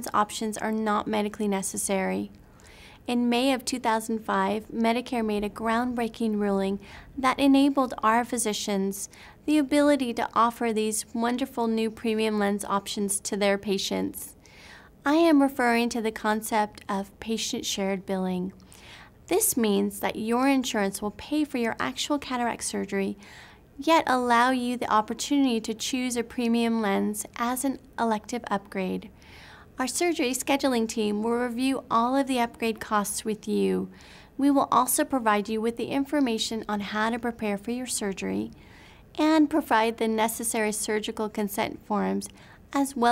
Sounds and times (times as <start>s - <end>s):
Speech: 0.0s - 2.3s, 3.1s - 14.3s, 15.0s - 18.6s, 19.3s - 23.2s, 23.8s - 29.1s, 29.8s - 38.6s, 39.2s - 43.1s.